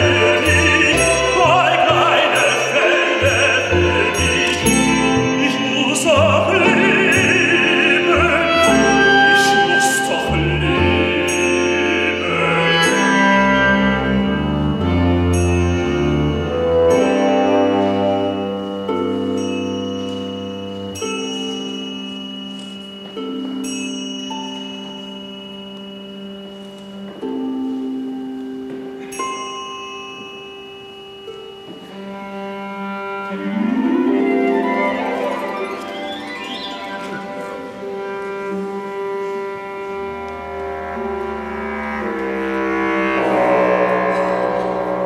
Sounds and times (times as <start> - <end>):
Opera: 0.0 - 45.0
Orchestra: 0.0 - 45.0
Tubular bells: 0.0 - 45.0.